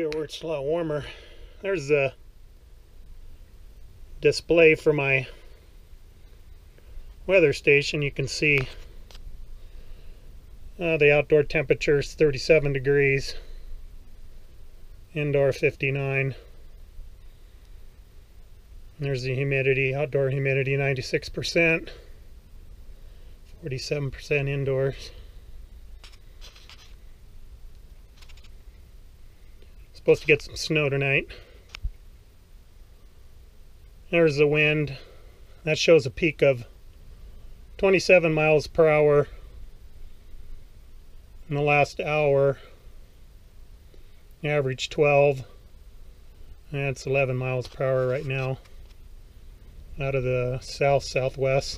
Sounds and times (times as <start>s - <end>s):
Speech: 0.0s - 2.2s, 4.2s - 5.4s, 7.3s - 8.8s, 10.8s - 13.4s, 15.1s - 16.4s, 19.0s - 22.0s, 23.6s - 25.2s, 30.0s - 31.4s, 34.1s - 35.0s, 35.6s - 36.7s, 37.8s - 39.4s, 41.5s - 42.7s, 44.4s - 45.5s, 46.7s - 48.6s, 50.0s - 51.7s
Inside, small room: 0.0s - 51.7s.